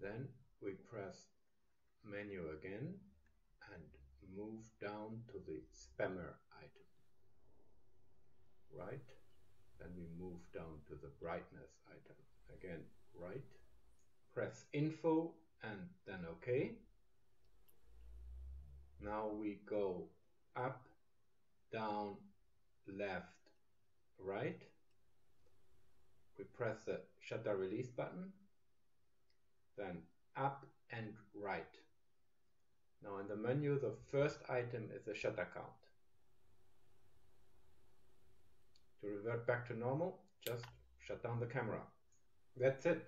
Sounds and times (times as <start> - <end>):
Speech: 0.0 - 1.4, 2.0 - 6.8, 8.7 - 9.2, 9.8 - 13.6, 14.3 - 16.8, 19.0 - 20.9, 21.7 - 22.2, 22.9 - 23.6, 24.2 - 24.8, 26.4 - 28.4, 29.8 - 31.9, 33.0 - 35.9, 39.0 - 42.0, 42.6 - 43.0.